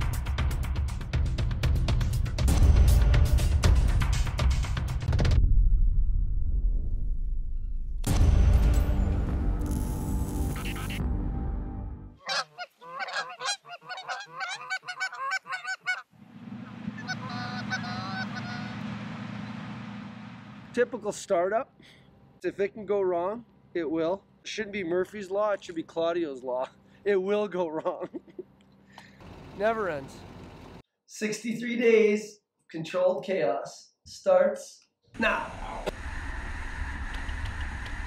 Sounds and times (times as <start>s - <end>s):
Music: 0.0s - 5.5s, 8.0s - 12.2s
Honk: 12.2s - 16.1s, 17.0s - 18.8s.